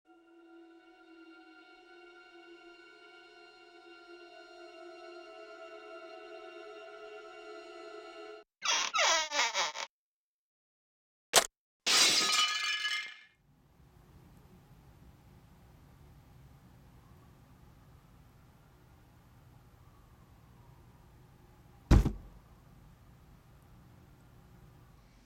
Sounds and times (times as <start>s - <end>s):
Music: 0.1s - 8.5s.